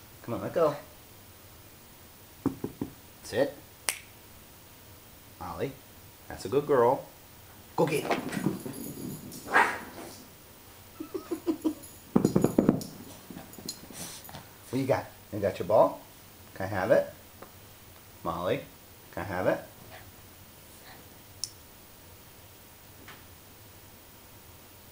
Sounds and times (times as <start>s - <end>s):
Speech: 0.2s - 0.9s, 3.2s - 3.6s, 5.4s - 7.1s, 7.8s - 8.2s, 14.7s - 17.2s, 18.2s - 19.7s
Dog: 9.4s - 10.2s
Canidae, dogs, wolves: 9.4s - 10.3s.